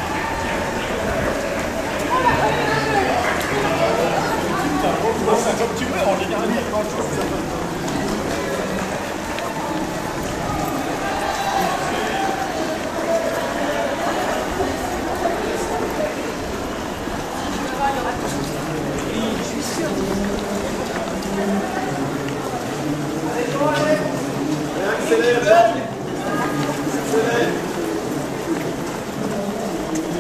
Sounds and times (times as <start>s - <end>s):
Outside, urban or manmade: 0.0s - 30.2s
Run: 0.0s - 30.2s
Speech: 0.0s - 30.2s.